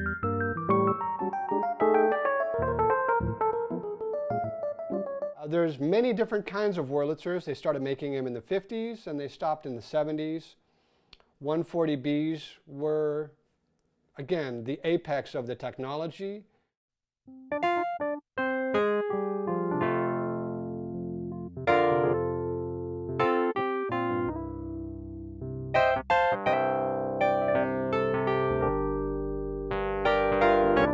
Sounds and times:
Electric piano: 0.0s - 5.4s, 17.3s - 30.9s.

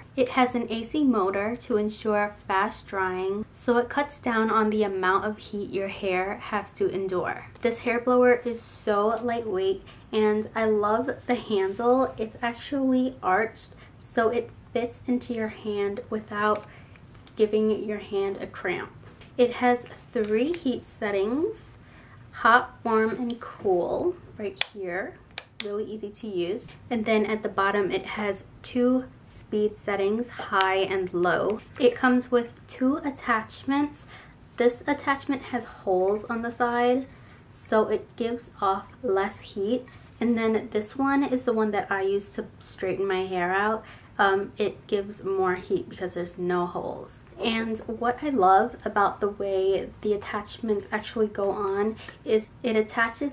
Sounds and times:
Speech: 0.2s - 16.7s, 17.4s - 53.3s.

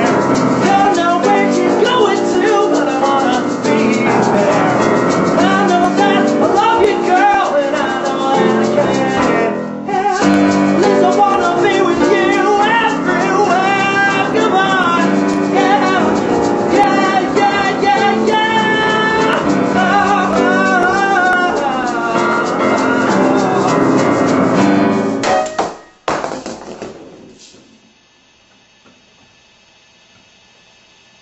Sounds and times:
Singing: 0.0s - 24.4s
Maraca: 0.0s - 26.5s
Piano: 0.0s - 27.4s.

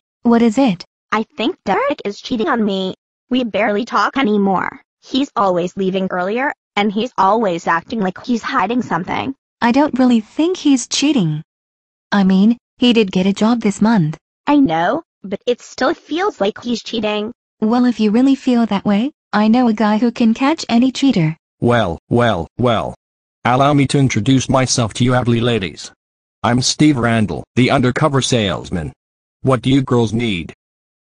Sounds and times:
Speech: 0.3s - 11.5s, 12.1s - 30.6s.

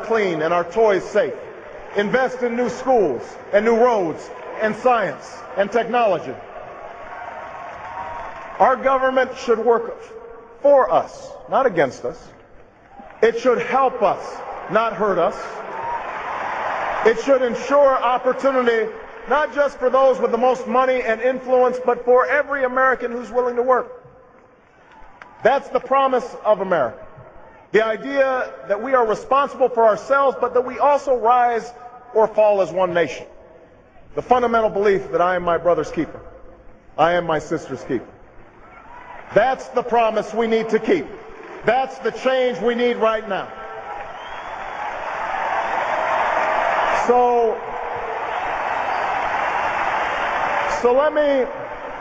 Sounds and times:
Male speech, man speaking: 0.0s - 1.4s, 2.0s - 6.4s, 8.6s - 12.3s, 13.2s - 15.6s, 17.0s - 24.0s, 25.4s - 27.0s, 27.7s - 33.3s, 34.2s - 36.3s, 37.0s - 38.1s, 39.3s - 43.6s, 46.9s - 47.7s, 50.7s - 51.6s
Narration, monologue: 0.0s - 6.8s, 8.4s - 15.8s, 16.9s - 44.1s, 46.6s - 48.3s, 50.6s - 52.0s.

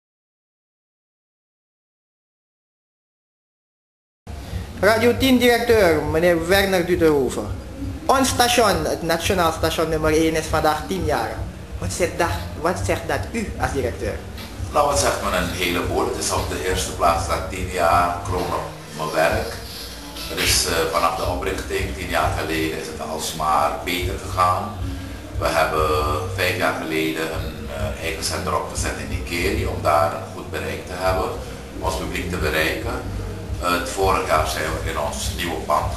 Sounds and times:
Music: 4.3s - 35.9s
Speech: 4.8s - 35.9s.

